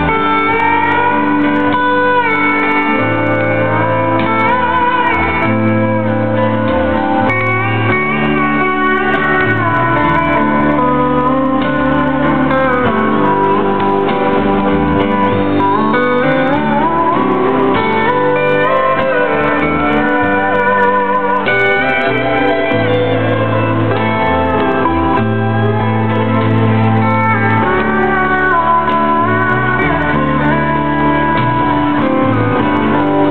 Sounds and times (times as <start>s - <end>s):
Music: 0.0s - 33.3s.